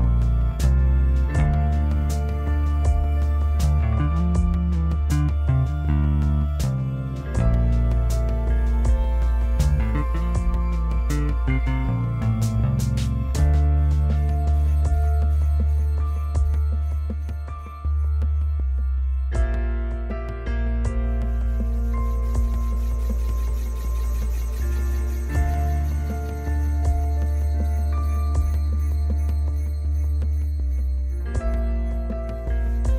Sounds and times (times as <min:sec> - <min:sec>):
Music: 0:00.0 - 0:32.9.